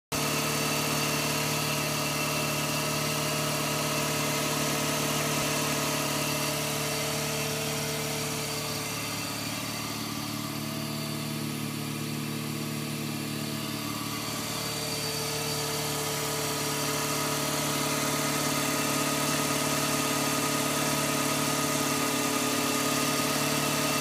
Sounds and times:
Medium engine (mid frequency): 0:00.0 - 0:24.0
Vehicle: 0:00.1 - 0:24.0.

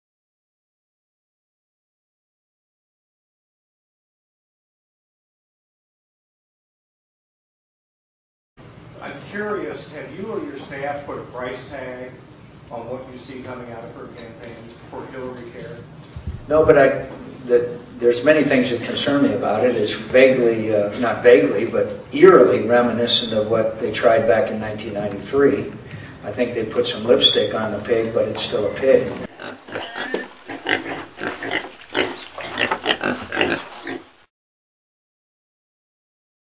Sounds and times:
Speech: 0:09.0 - 0:15.9, 0:16.5 - 0:29.3.

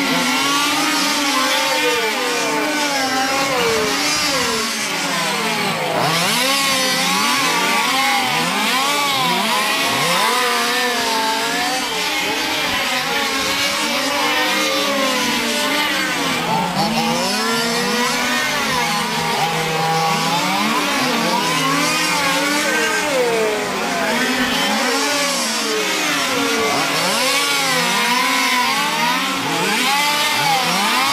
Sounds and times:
Truck: 0:00.0 - 0:31.1.

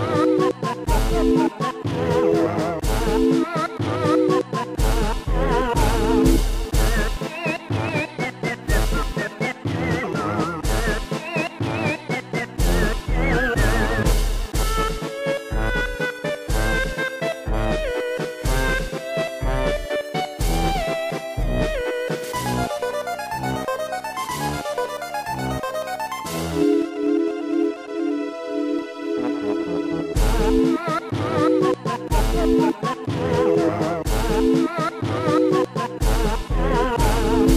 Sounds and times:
Music: 0:00.0 - 0:37.5.

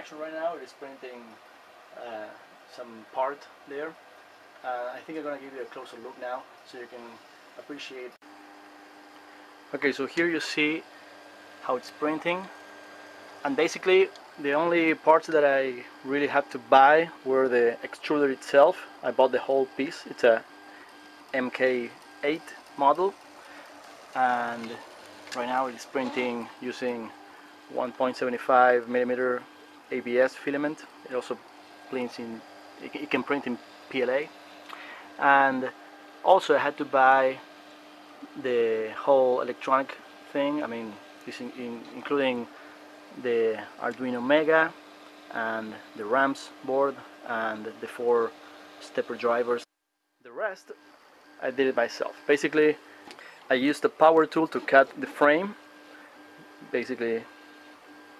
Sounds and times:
Speech: 0:00.0 - 0:01.4, 0:02.0 - 0:04.0, 0:04.6 - 0:08.2, 0:09.7 - 0:10.9, 0:11.6 - 0:12.5, 0:13.4 - 0:20.4, 0:21.3 - 0:23.2, 0:24.2 - 0:27.1, 0:27.7 - 0:34.3, 0:35.2 - 0:37.4, 0:38.2 - 0:42.5, 0:43.2 - 0:49.7, 0:50.3 - 0:50.8, 0:51.4 - 0:52.8, 0:53.5 - 0:55.6, 0:56.6 - 0:57.3
Printer: 0:00.0 - 0:49.7, 0:50.6 - 0:58.1.

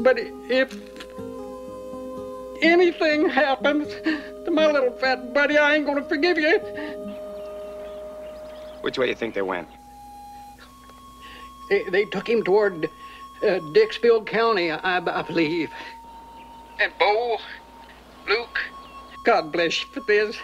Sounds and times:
Music: 0:00.0 - 0:20.4
Speech: 0:02.6 - 0:06.7, 0:08.8 - 0:09.7, 0:11.7 - 0:15.9, 0:16.8 - 0:17.6, 0:18.3 - 0:20.4.

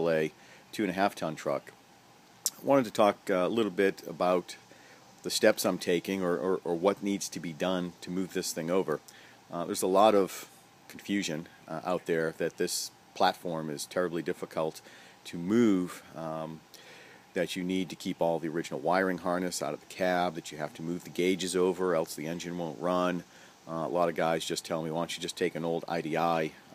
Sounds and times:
Speech: 0:00.0 - 0:01.8, 0:02.5 - 0:04.6, 0:05.2 - 0:16.6, 0:17.4 - 0:26.6.

